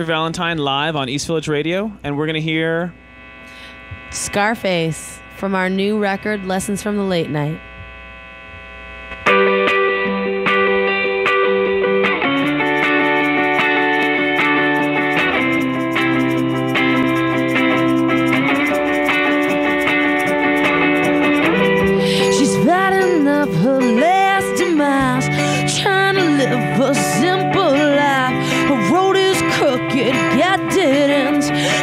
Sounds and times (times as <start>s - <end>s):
Music: 9.1s - 31.8s.